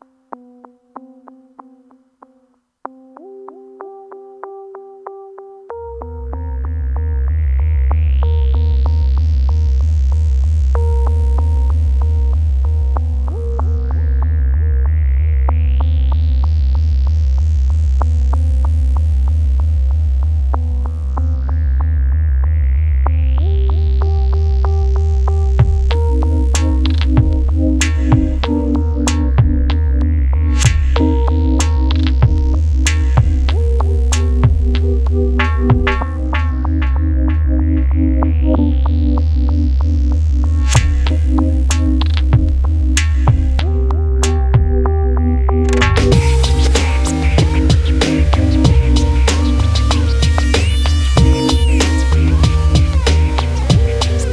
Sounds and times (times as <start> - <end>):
Music: 0.0 - 54.3.